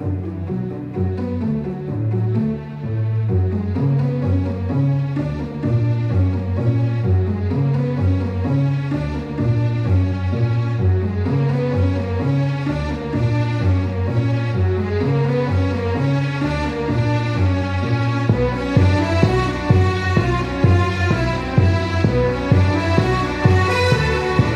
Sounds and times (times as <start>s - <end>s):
Music: 0.0s - 24.5s.